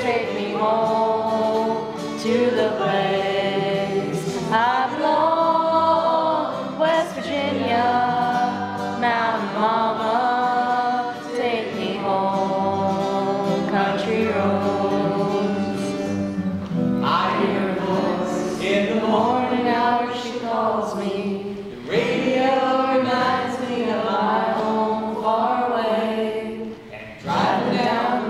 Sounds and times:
Male singing: 0:00.0 - 0:16.2, 0:17.0 - 0:21.2
Choir: 0:00.0 - 0:28.3.

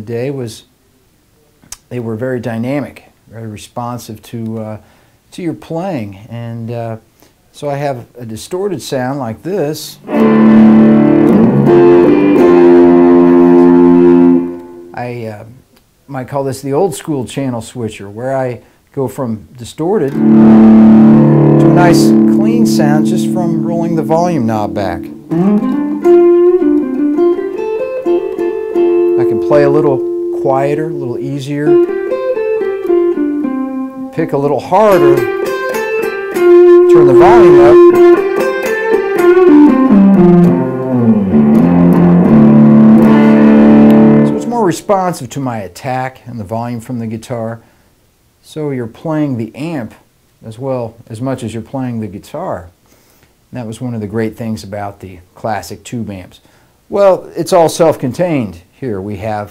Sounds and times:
Speech: 0:00.0 - 0:00.7, 0:01.4 - 0:10.0, 0:15.0 - 0:20.2, 0:21.6 - 0:25.1, 0:29.2 - 0:31.8, 0:34.1 - 0:35.3, 0:36.9 - 0:38.0, 0:44.3 - 0:47.6, 0:48.4 - 0:52.8, 0:53.5 - 0:59.5
Inside, small room: 0:00.0 - 0:59.5
Guitar: 0:09.7 - 0:15.1, 0:20.0 - 0:45.3.

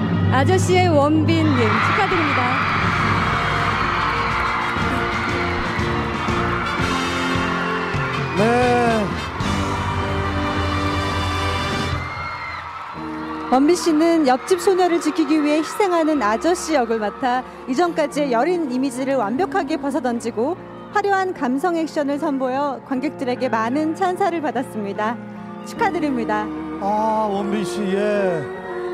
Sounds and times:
Music: 0:00.0 - 0:28.9.

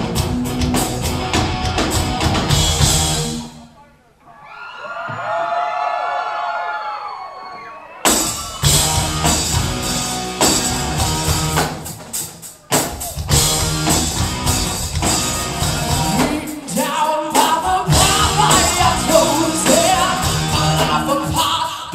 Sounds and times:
Music: 0:00.0 - 0:03.6, 0:08.1 - 0:21.9.

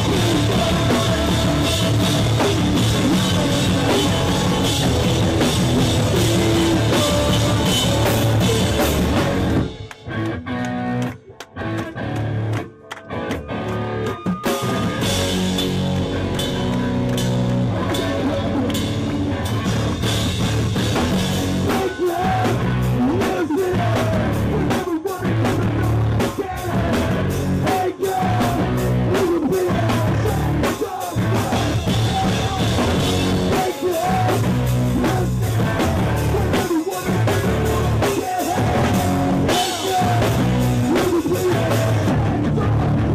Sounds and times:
Rock music: 0:00.0 - 0:43.1.

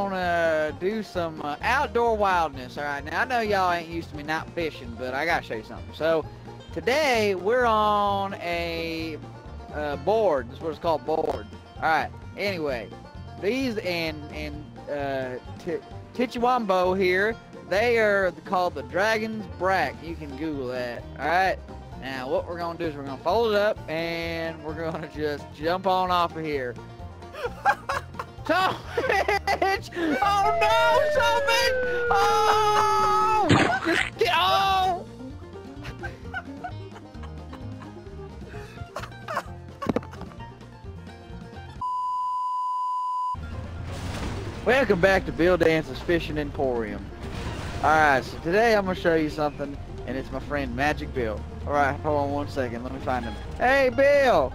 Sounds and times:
Speech: 0:00.0 - 0:06.2, 0:06.8 - 0:26.8, 0:29.6 - 0:35.0, 0:44.7 - 0:47.0, 0:47.8 - 0:54.5
Music: 0:00.0 - 0:42.0, 0:43.3 - 0:54.5.

